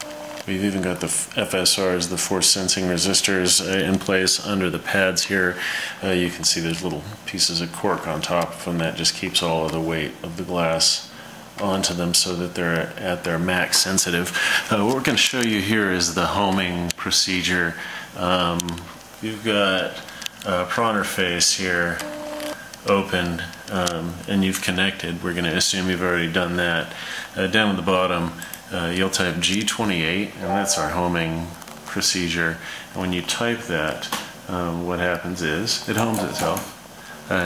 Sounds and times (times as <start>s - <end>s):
Speech: 0.5s - 22.1s, 22.8s - 37.4s.